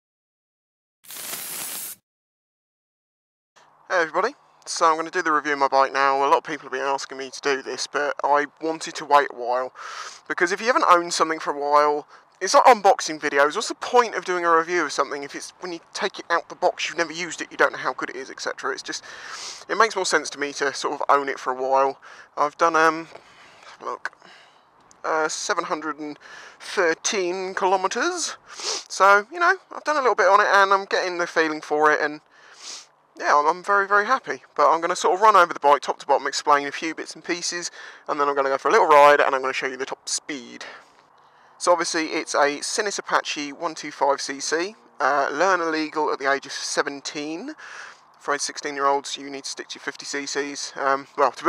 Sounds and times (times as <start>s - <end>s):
Speech: 3.9s - 23.1s, 23.7s - 24.2s, 25.0s - 32.2s, 33.2s - 40.8s, 41.6s - 47.6s, 48.2s - 51.4s.